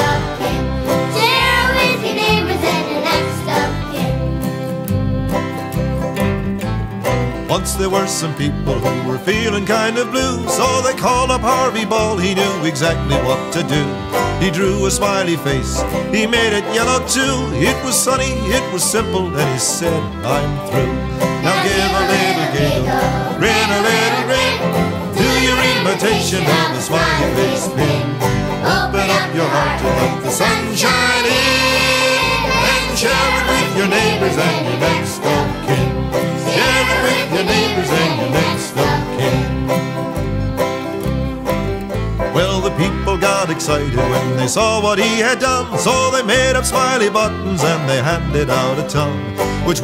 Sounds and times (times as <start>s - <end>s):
Funny music: 0.0s - 49.8s.